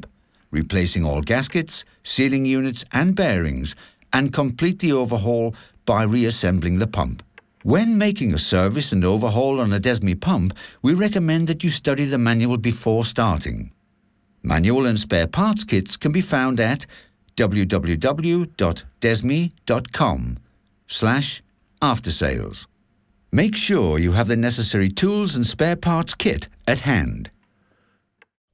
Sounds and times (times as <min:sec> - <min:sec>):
Speech: 0:00.0 - 0:13.8, 0:14.4 - 0:22.7, 0:23.3 - 0:27.4.